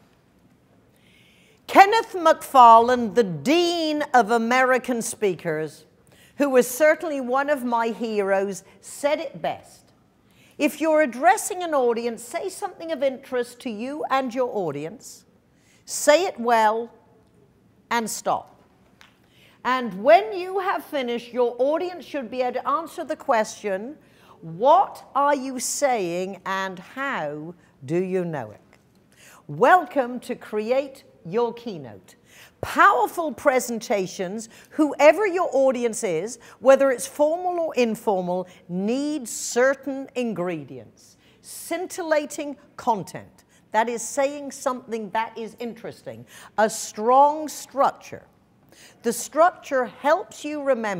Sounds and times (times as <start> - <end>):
Female speech, woman speaking: 1.7 - 9.9, 10.6 - 15.2, 15.9 - 17.0, 17.9 - 18.5, 19.7 - 28.6, 29.5 - 48.3, 49.1 - 50.9.